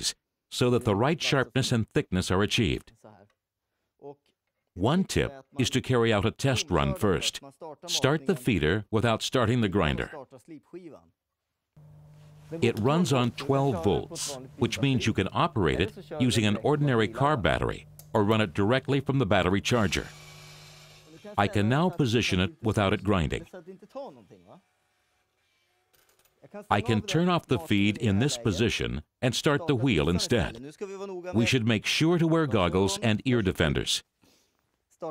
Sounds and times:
Speech: 0:00.0 - 0:03.4, 0:04.0 - 0:11.1, 0:12.5 - 0:20.2, 0:21.1 - 0:24.7, 0:26.4 - 0:34.1.

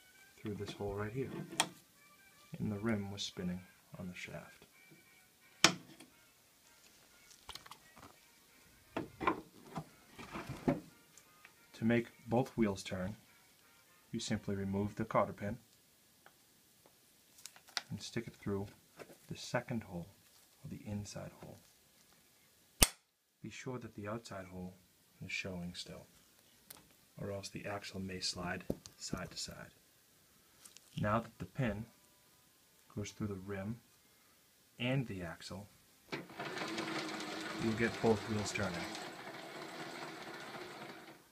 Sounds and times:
Speech: 0:00.4 - 0:01.4, 0:02.5 - 0:04.6, 0:11.8 - 0:13.2, 0:14.1 - 0:15.6, 0:17.9 - 0:21.6, 0:23.4 - 0:26.1, 0:27.2 - 0:29.8, 0:31.0 - 0:31.9, 0:32.9 - 0:33.8, 0:34.8 - 0:35.7, 0:37.5 - 0:39.0.

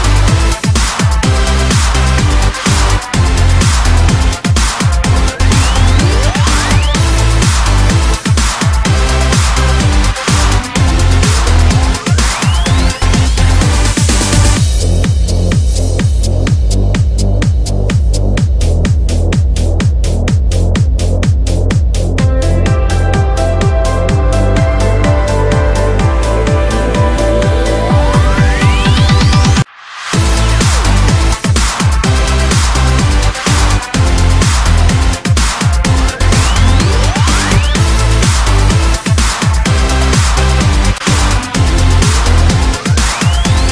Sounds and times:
Music: 0:00.0 - 0:43.7.

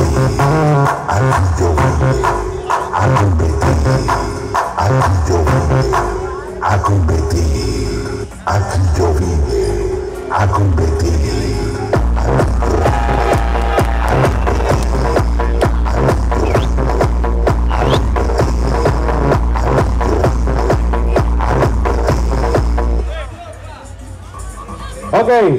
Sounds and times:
Music: 0:00.0 - 0:25.5.

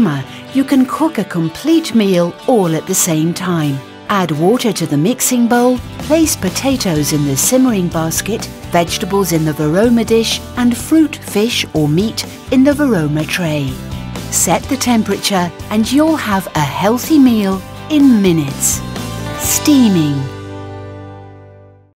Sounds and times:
Speech: 0:00.0 - 0:18.8, 0:19.4 - 0:20.3
Music: 0:00.0 - 0:21.9.

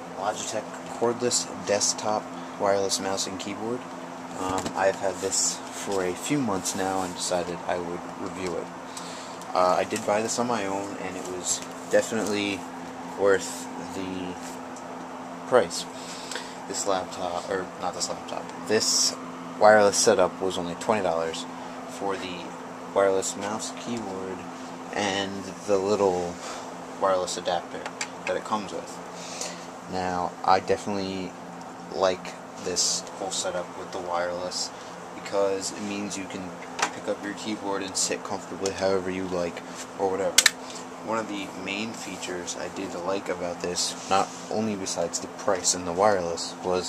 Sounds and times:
Speech: 0:00.2 - 0:14.6, 0:15.5 - 0:46.8.

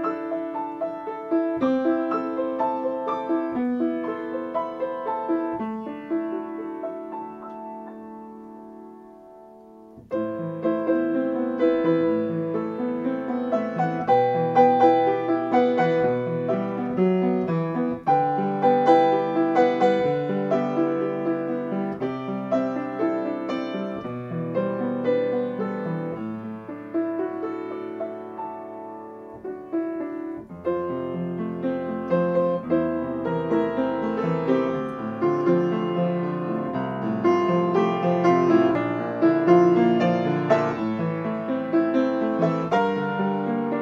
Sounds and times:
Music: 0:00.0 - 0:43.8.

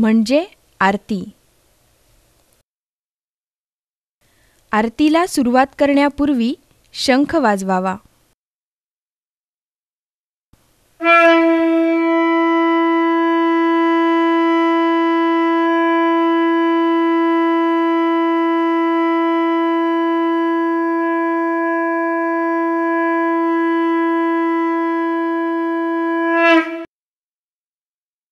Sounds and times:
Inside, small room: 0:00.0 - 0:02.6, 0:10.6 - 0:26.9
Wind instrument, woodwind instrument: 0:11.0 - 0:26.9.

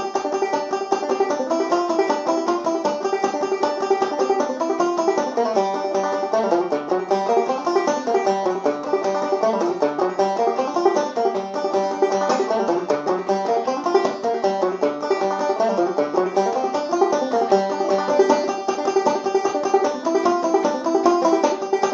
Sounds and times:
Banjo: 0:00.0 - 0:21.9.

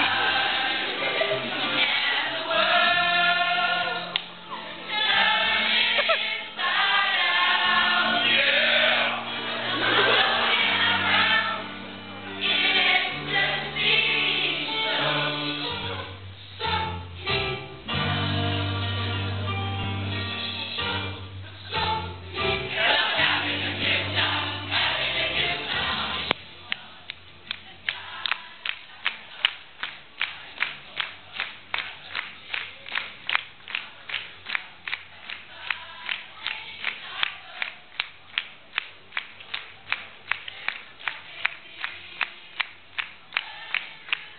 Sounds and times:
Choir: 0:00.0 - 0:32.2, 0:34.9 - 0:38.1, 0:40.3 - 0:44.3
Inside, large room or hall: 0:00.0 - 0:44.3.

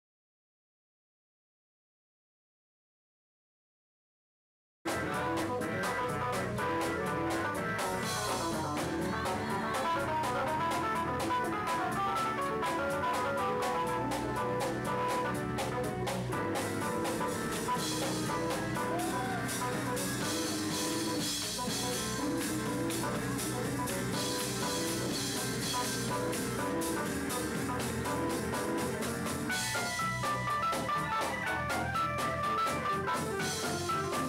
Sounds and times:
Music: 0:04.9 - 0:34.2
Singing: 0:08.4 - 0:10.6.

